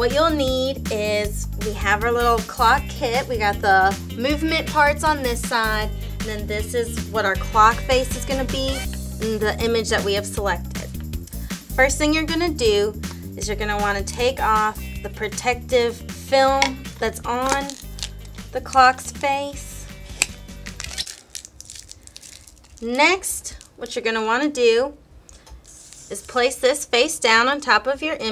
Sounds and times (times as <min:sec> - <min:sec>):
Speech: 0:00.0 - 0:10.9, 0:11.8 - 0:17.8, 0:18.5 - 0:19.7, 0:22.8 - 0:25.0, 0:26.1 - 0:28.3
Music: 0:00.0 - 0:21.1.